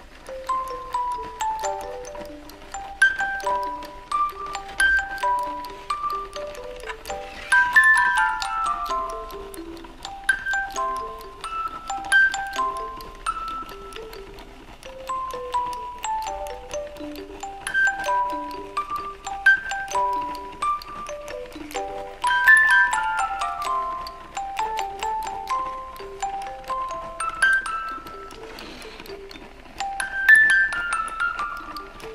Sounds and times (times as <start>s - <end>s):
Music: 0.0s - 32.1s.